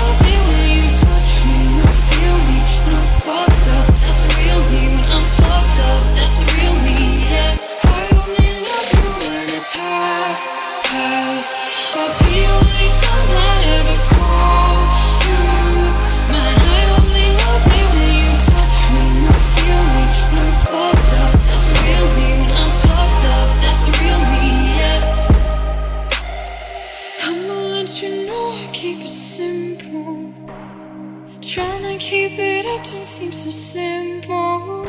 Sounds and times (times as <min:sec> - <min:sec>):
Music: 0:00.0 - 0:34.8.